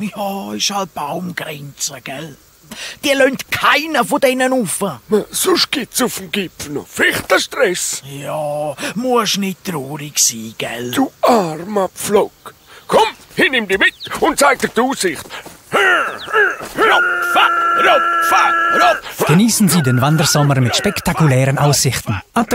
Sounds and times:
Speech: 0.0s - 2.4s, 3.0s - 15.3s, 17.8s - 22.5s.

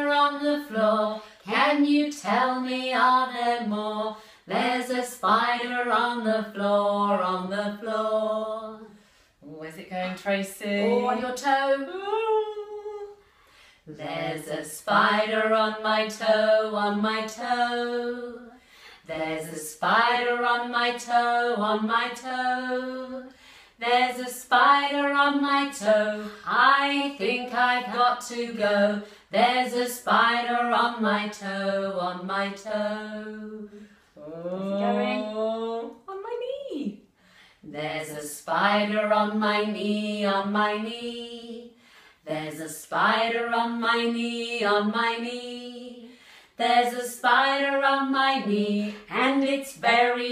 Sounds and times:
Female singing: 0.0s - 13.2s, 13.9s - 36.7s, 37.7s - 50.3s.

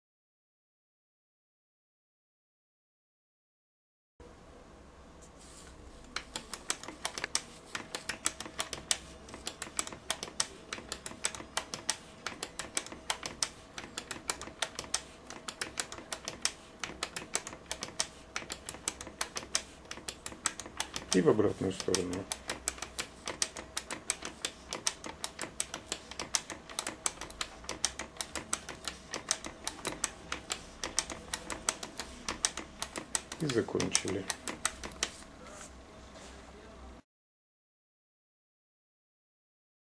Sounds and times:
Typewriter: 6.1s - 35.3s
Speech: 21.1s - 22.3s, 33.4s - 34.4s, 35.4s - 37.0s.

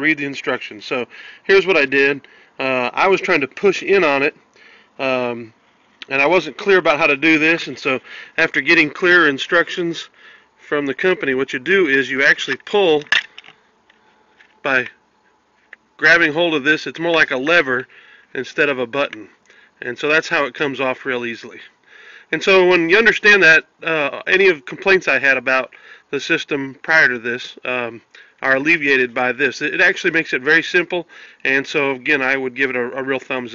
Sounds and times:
Speech: 0.0s - 4.4s, 5.0s - 10.1s, 10.7s - 13.1s, 14.6s - 15.0s, 16.0s - 21.7s, 22.3s - 33.5s.

